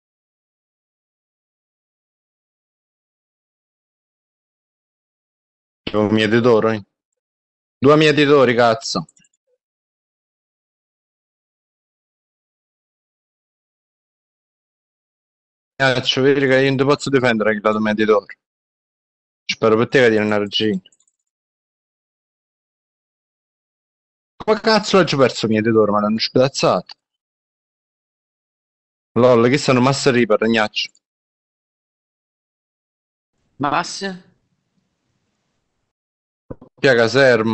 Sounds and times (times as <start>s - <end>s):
Speech: 5.9s - 6.9s, 7.8s - 9.2s, 15.8s - 18.4s, 19.5s - 20.9s, 24.4s - 27.0s, 29.2s - 31.0s, 33.6s - 34.3s, 36.5s - 37.5s
Inside, small room: 15.8s - 18.5s, 19.5s - 21.3s, 29.2s - 31.1s.